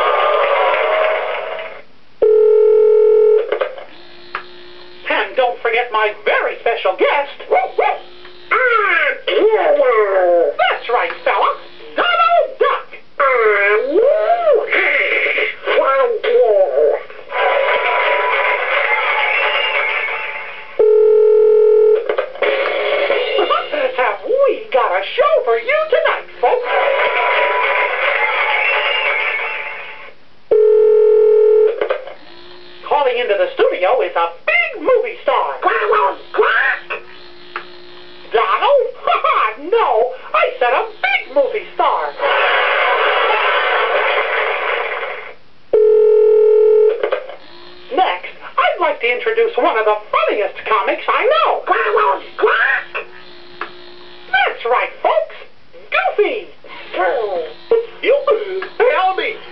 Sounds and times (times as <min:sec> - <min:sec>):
Speech: 0:05.1 - 0:14.8, 0:15.7 - 0:17.0, 0:23.4 - 0:26.8, 0:32.9 - 0:37.0, 0:38.3 - 0:42.2, 0:47.9 - 0:53.0, 0:54.3 - 0:59.4
Music: 0:18.1 - 0:20.8, 0:22.4 - 0:23.7, 0:27.3 - 0:30.1.